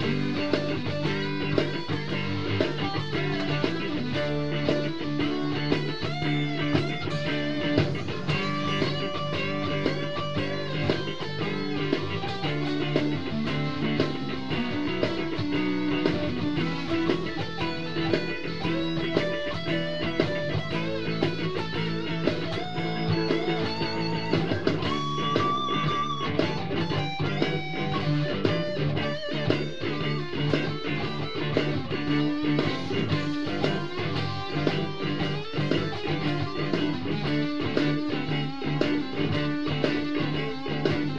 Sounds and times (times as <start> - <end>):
Electric guitar: 0.0 - 41.1.